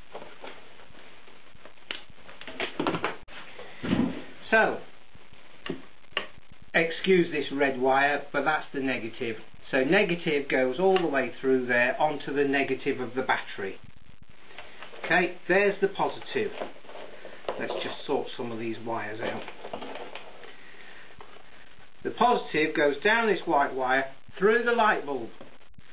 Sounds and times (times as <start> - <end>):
Inside, small room: 0.0 - 25.9
Speech: 4.4 - 4.9, 6.7 - 13.8, 15.0 - 16.7, 17.6 - 19.5, 22.0 - 25.4.